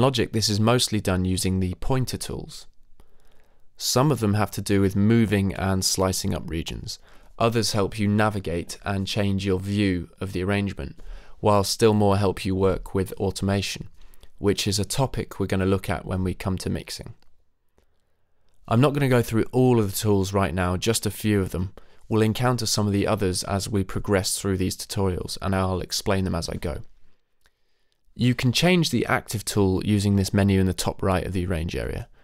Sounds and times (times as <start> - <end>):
Speech: 0.0 - 2.7, 3.8 - 17.3, 18.7 - 26.9, 28.2 - 32.2.